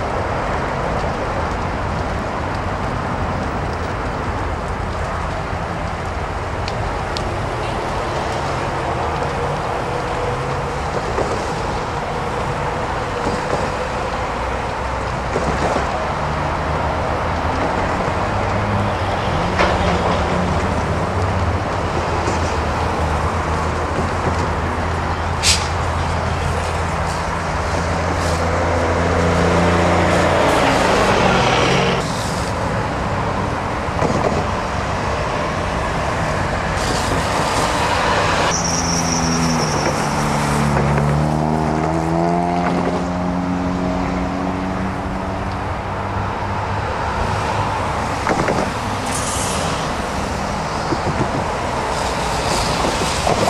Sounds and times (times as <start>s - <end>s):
Fire: 0.0s - 53.4s.